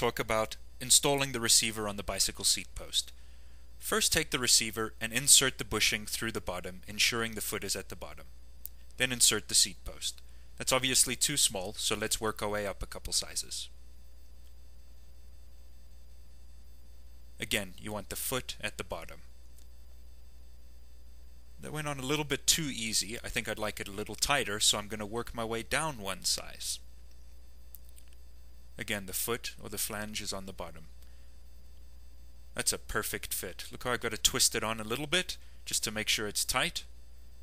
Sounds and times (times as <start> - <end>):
Speech: 0.0 - 3.2, 3.8 - 8.3, 9.0 - 13.8, 17.4 - 19.3, 21.6 - 26.9, 28.8 - 30.9, 32.6 - 36.9.